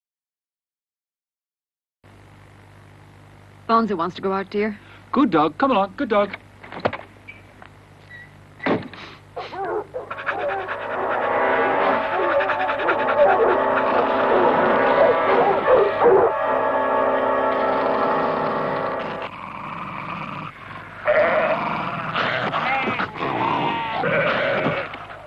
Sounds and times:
Yip: 0:09.4 - 0:11.2, 0:11.9 - 0:16.3
Bow-wow: 0:09.4 - 0:16.4, 0:21.1 - 0:25.2.

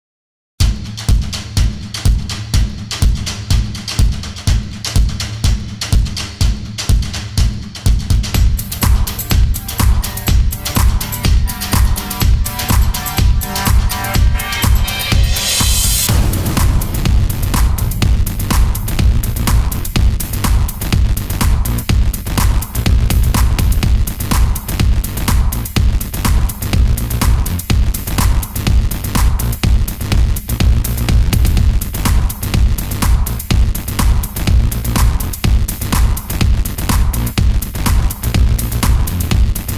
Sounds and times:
Techno: 0:00.6 - 0:39.7
Electronica: 0:08.3 - 0:29.6.

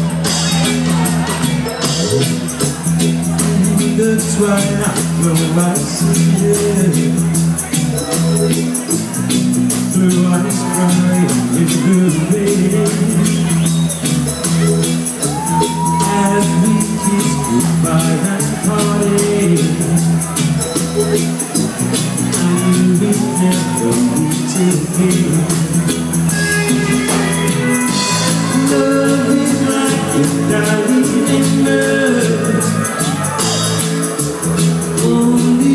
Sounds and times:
Speech: 0:00.0 - 0:25.8
Music: 0:00.0 - 0:35.7.

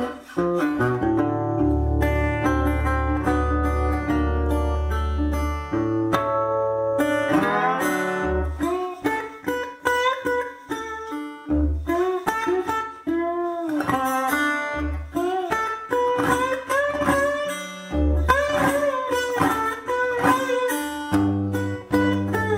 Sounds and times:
Blues: 0:00.0 - 0:22.5
Steel guitar, slide guitar: 0:00.0 - 0:22.5
Strum: 0:00.0 - 0:22.5.

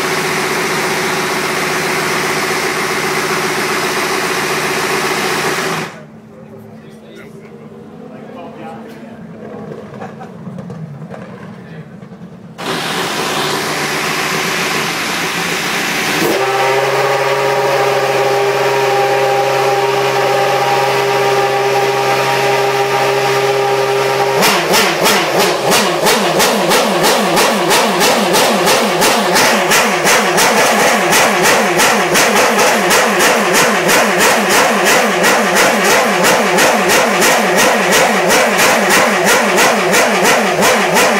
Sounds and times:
Car: 0:00.0 - 0:41.1.

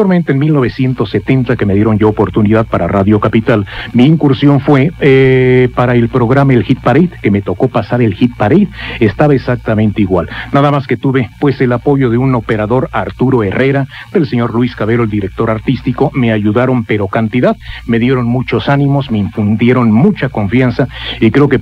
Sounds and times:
Speech: 0:00.0 - 0:21.6.

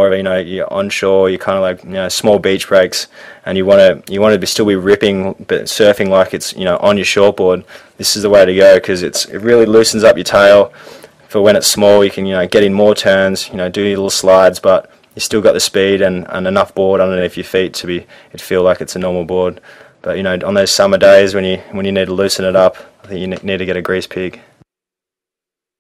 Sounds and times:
Speech: 0:00.0 - 0:24.5.

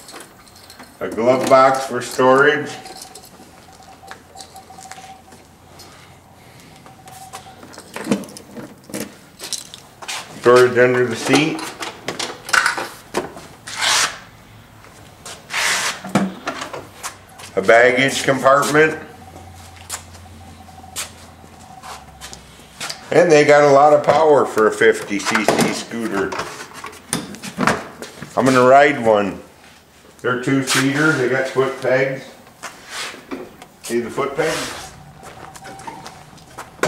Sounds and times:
Speech: 0:01.0 - 0:02.8, 0:10.4 - 0:11.6, 0:17.6 - 0:19.1, 0:23.1 - 0:26.4, 0:28.4 - 0:29.5, 0:30.2 - 0:32.4, 0:33.9 - 0:34.8.

